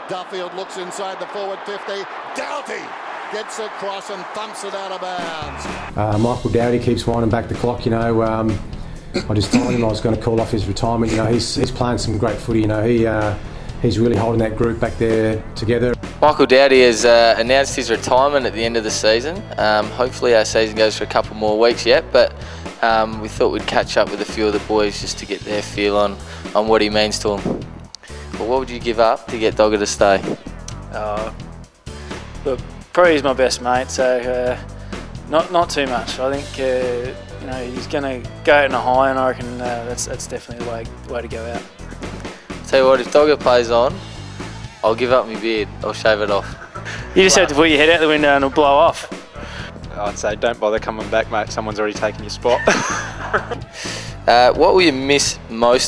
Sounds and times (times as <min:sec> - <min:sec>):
Speech: 0:00.0 - 0:08.6, 0:09.2 - 0:27.5, 0:28.4 - 0:31.3, 0:32.4 - 0:34.6, 0:35.3 - 0:41.7, 0:42.6 - 0:44.0, 0:44.8 - 0:46.6, 0:47.2 - 0:49.2, 0:49.9 - 0:52.7, 0:54.3 - 0:55.8
Music: 0:00.0 - 0:55.8.